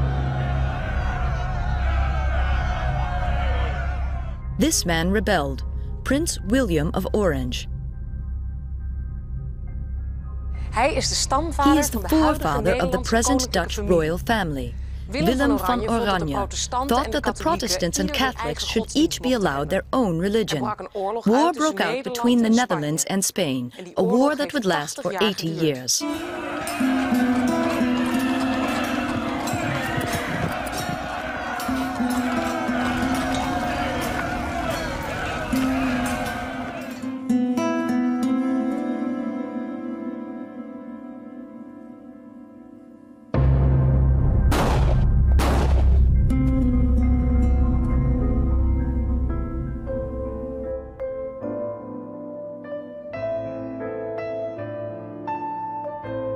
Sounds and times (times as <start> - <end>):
Scary music: 0.0 - 20.5, 26.0 - 52.3.